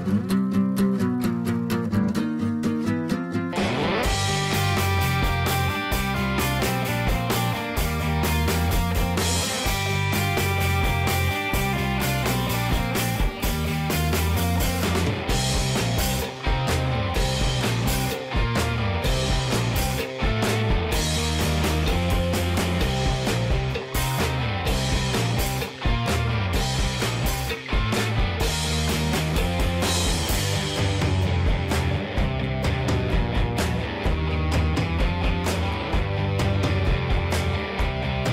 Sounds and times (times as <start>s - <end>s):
Music: 0.0s - 38.3s.